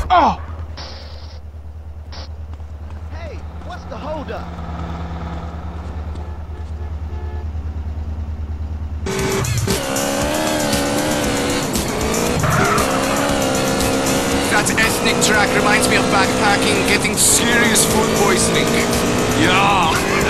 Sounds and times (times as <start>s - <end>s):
Speech: 3.1s - 4.5s, 14.5s - 20.2s
Music: 9.1s - 20.2s.